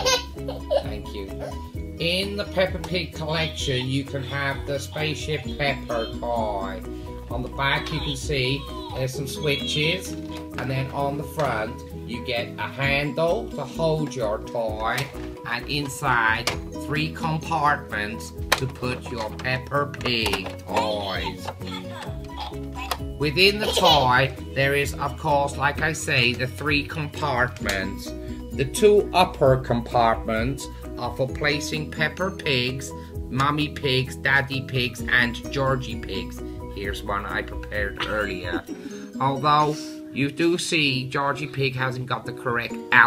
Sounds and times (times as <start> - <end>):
Music: 0.0 - 43.0
Speech: 0.9 - 21.5, 23.2 - 38.6, 39.2 - 43.0.